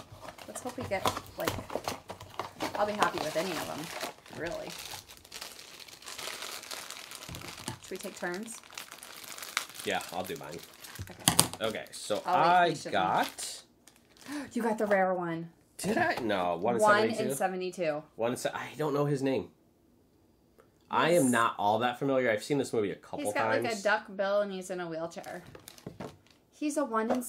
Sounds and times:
Crumpling, crinkling: 0:00.0 - 0:14.9, 0:25.2 - 0:26.4.

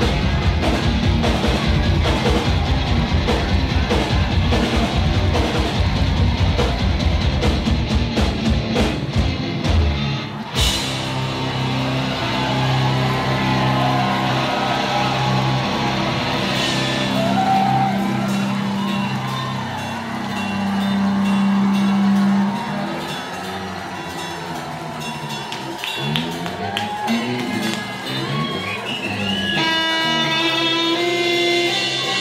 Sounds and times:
Musical instrument: 0:10.4 - 0:32.2.

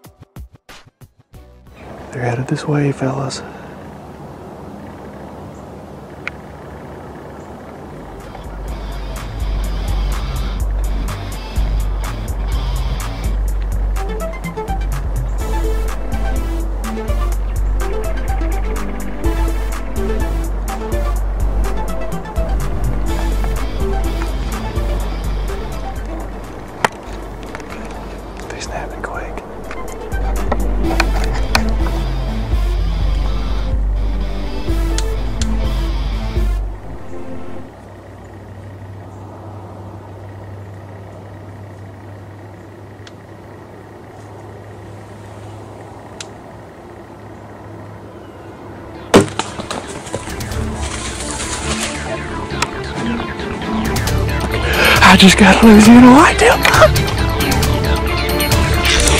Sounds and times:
Music: 0:00.0 - 0:01.8, 0:08.2 - 0:37.7, 0:50.1 - 0:59.1.

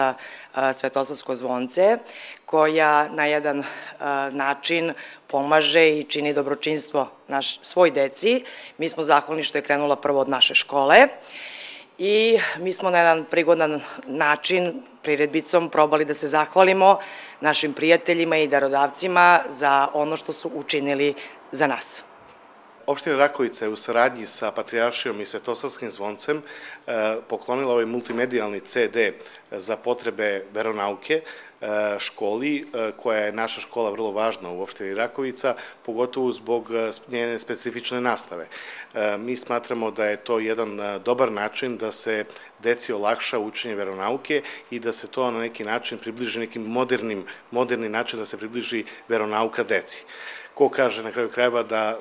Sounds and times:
Speech: 0:00.0 - 0:11.2, 0:12.0 - 0:22.1, 0:22.9 - 0:52.0.

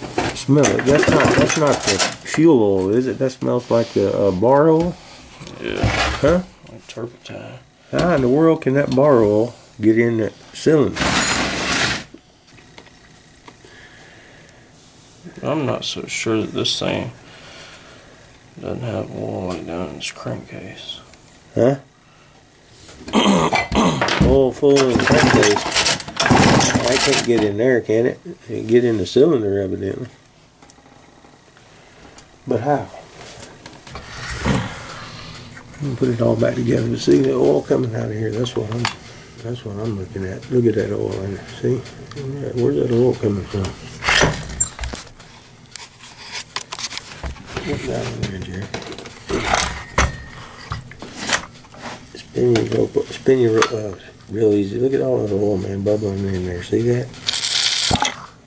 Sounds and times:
Speech: 0:00.4 - 0:05.0, 0:05.6 - 0:11.0, 0:15.2 - 0:17.2, 0:18.6 - 0:21.9, 0:24.2 - 0:25.7, 0:26.7 - 0:30.2, 0:32.5 - 0:33.0, 0:35.8 - 0:43.8, 0:47.6 - 0:48.8, 0:52.2 - 0:57.2.

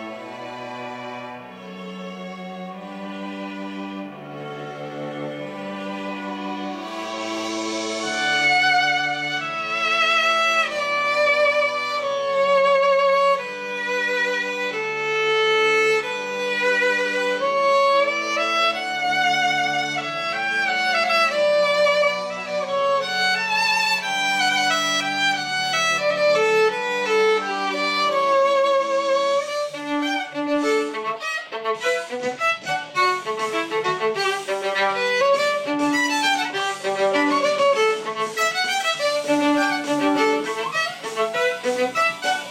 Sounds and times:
Violin, fiddle: 0:00.0 - 0:42.5.

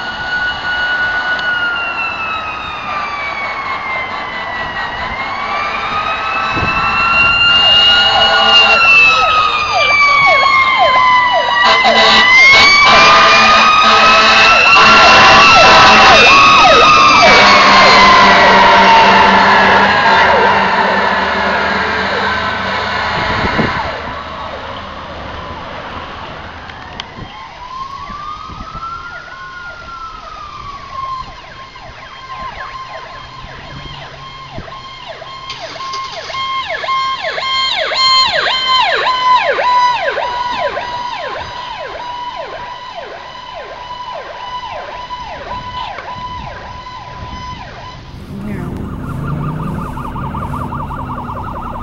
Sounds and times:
Police car (siren): 0:00.0 - 0:51.8.

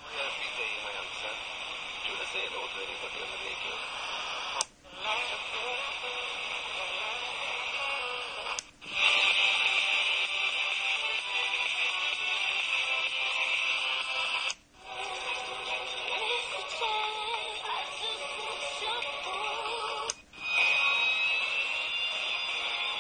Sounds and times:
Music: 0:00.0 - 0:23.0
Radio: 0:00.0 - 0:23.0.

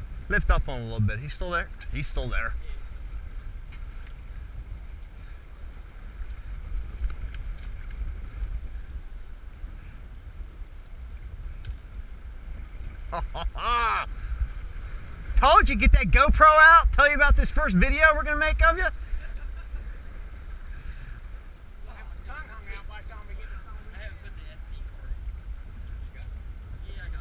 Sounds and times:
Wind noise (microphone): 0:00.0 - 0:27.2.

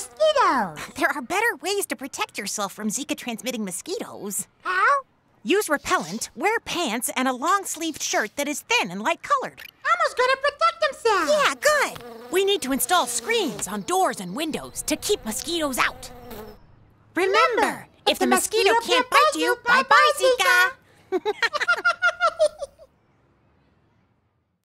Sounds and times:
Fly, housefly: 0:00.0 - 0:00.6, 0:10.8 - 0:16.7.

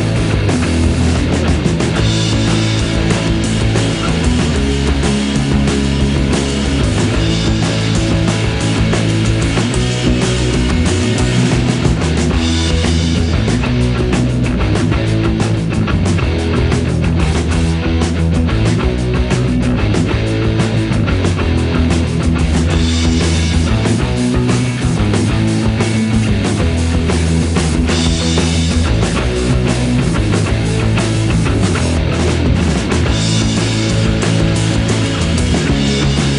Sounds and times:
Punk rock: 0:00.0 - 0:36.3.

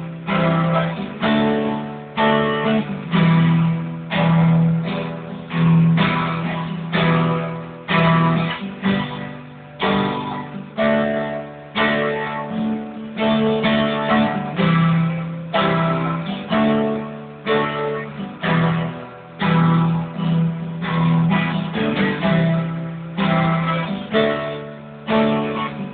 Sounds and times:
Electric guitar: 0:00.0 - 0:25.9.

